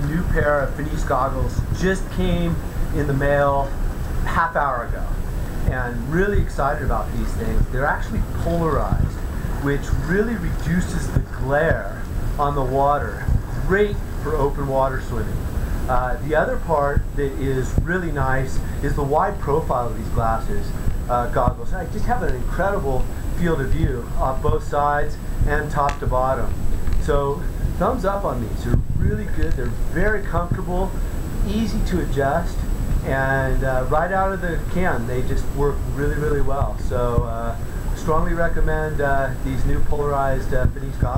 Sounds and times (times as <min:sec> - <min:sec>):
Speech: 0:00.0 - 0:41.1.